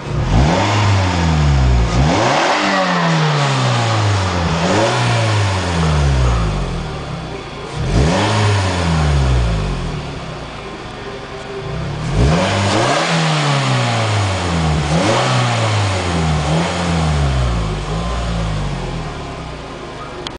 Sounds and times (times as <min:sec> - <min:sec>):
Vehicle: 0:00.0 - 0:20.3
Accelerating, revving, vroom: 0:00.1 - 0:06.5, 0:07.8 - 0:09.5, 0:12.0 - 0:18.7.